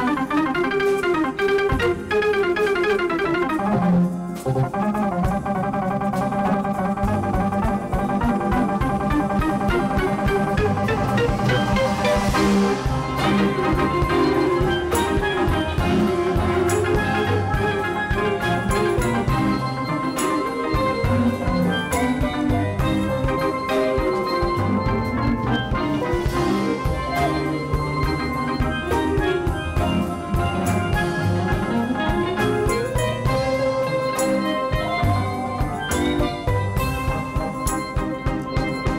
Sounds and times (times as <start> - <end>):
Drum: 0.0 - 38.9
Drum kit: 0.0 - 38.9
Steelpan: 0.0 - 38.9.